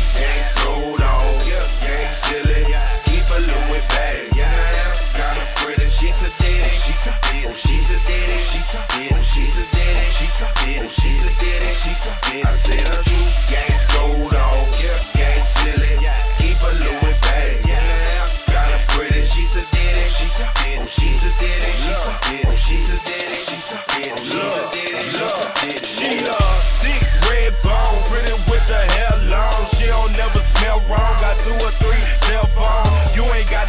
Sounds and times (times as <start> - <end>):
Music: 0.0 - 33.6.